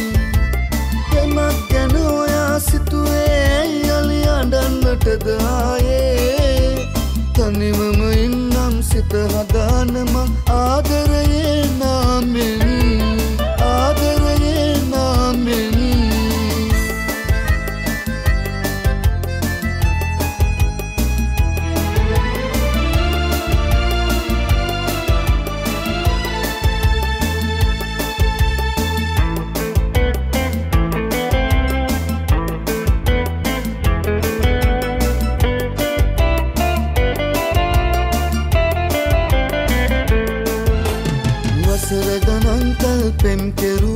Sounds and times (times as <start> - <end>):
Music: 0.0 - 43.9.